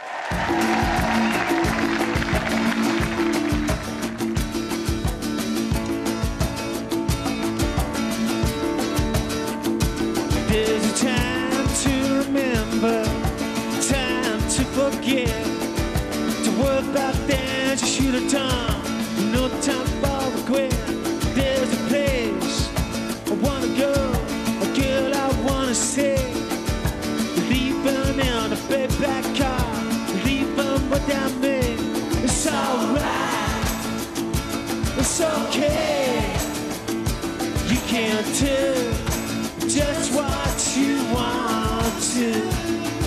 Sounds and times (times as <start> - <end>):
Music: 0.0 - 43.0
Singing: 27.4 - 34.0, 35.0 - 36.8, 37.7 - 43.0.